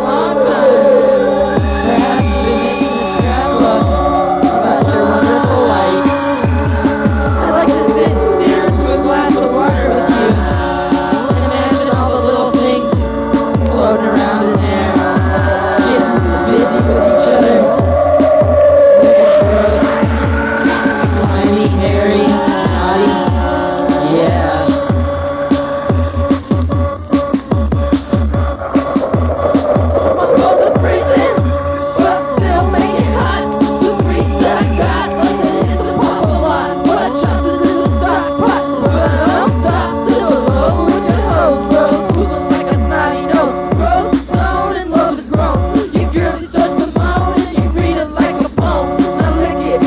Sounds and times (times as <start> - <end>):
Music: 0.0 - 49.8.